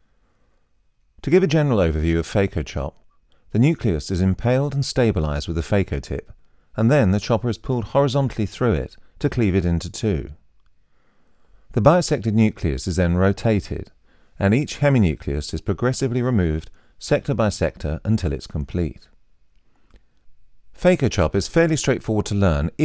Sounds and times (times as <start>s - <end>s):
Speech: 1.2s - 10.4s, 11.7s - 19.1s, 20.8s - 22.8s.